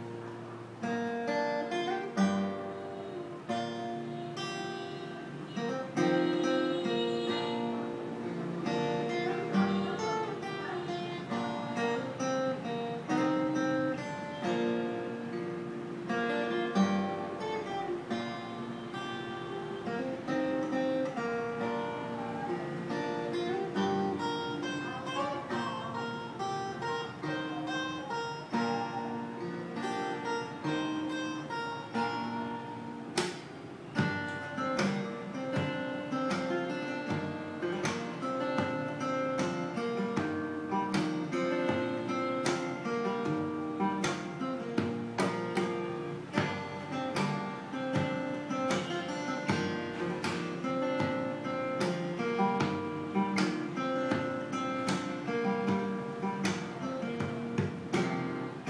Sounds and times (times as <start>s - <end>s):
Acoustic guitar: 0.0s - 58.6s.